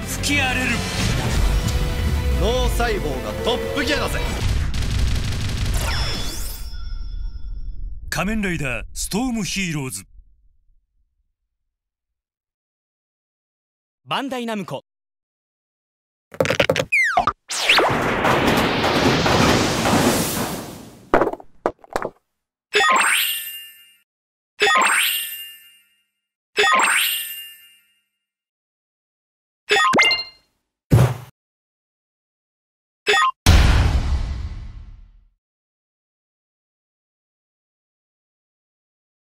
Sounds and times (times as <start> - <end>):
Speech: 0.1 - 0.8, 2.4 - 4.3, 8.2 - 10.1, 14.1 - 14.9.